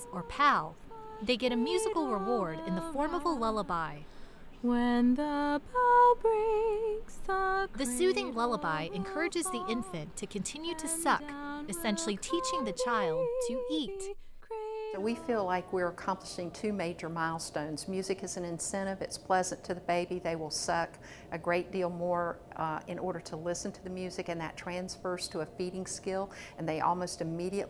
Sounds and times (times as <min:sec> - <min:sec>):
Lullaby: 0:00.0 - 0:04.0, 0:04.6 - 0:16.6
Speech: 0:00.0 - 0:04.0, 0:07.8 - 0:14.1, 0:15.0 - 0:27.7.